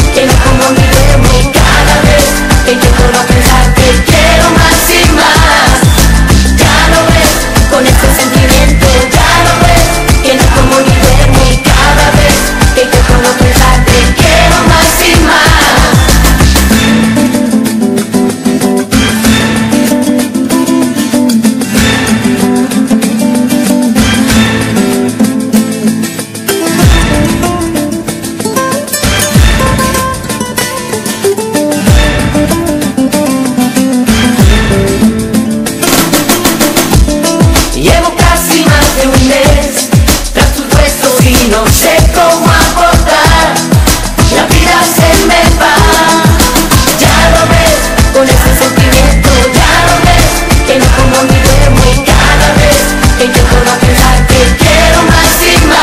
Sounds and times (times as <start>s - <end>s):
Pop music: 0.0s - 55.8s.